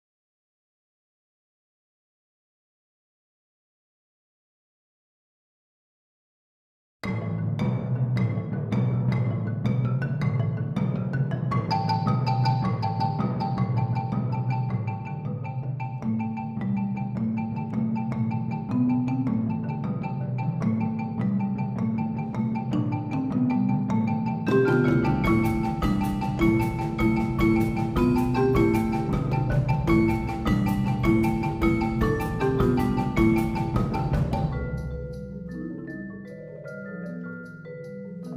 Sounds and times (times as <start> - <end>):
Marimba, xylophone: 7.0 - 38.3
Vibraphone: 7.0 - 38.3.